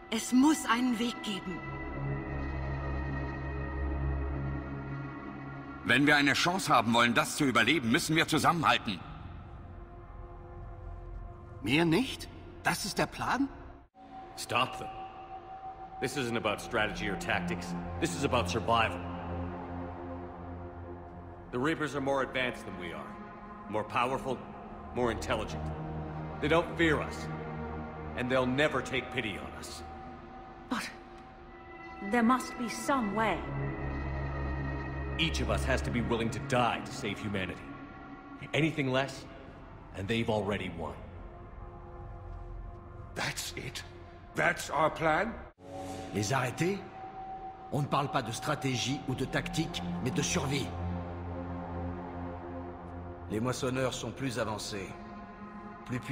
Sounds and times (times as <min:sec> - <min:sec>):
Conversation: 0:00.0 - 0:56.1
Music: 0:00.0 - 0:56.1
Narration, monologue: 0:00.0 - 0:56.1
Male speech, man speaking: 0:05.8 - 0:09.2, 0:11.6 - 0:13.5, 0:14.4 - 0:15.0, 0:16.0 - 0:19.0, 0:21.5 - 0:25.7, 0:26.4 - 0:27.3, 0:28.2 - 0:29.8, 0:35.2 - 0:37.7, 0:38.4 - 0:39.3, 0:39.9 - 0:41.1, 0:43.2 - 0:45.5, 0:46.1 - 0:46.9, 0:47.7 - 0:50.8, 0:53.3 - 0:55.0, 0:55.9 - 0:56.1.